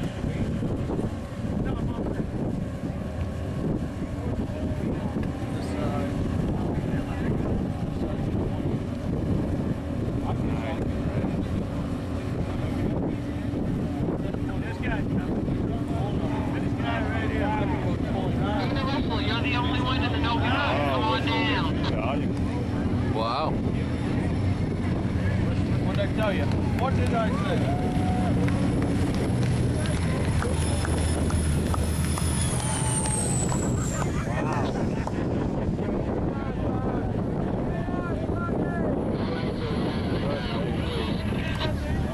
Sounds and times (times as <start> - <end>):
Motorboat, speedboat: 0.0 - 42.1
Wind noise (microphone): 0.0 - 42.1.